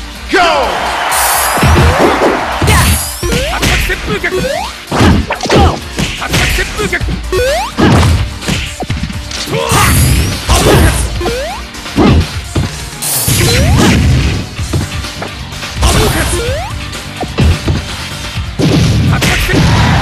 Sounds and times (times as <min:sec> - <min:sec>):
Whack, thwack: 0:04.9 - 0:06.7, 0:07.8 - 0:11.0, 0:12.0 - 0:14.9, 0:17.2 - 0:17.8, 0:18.6 - 0:20.0.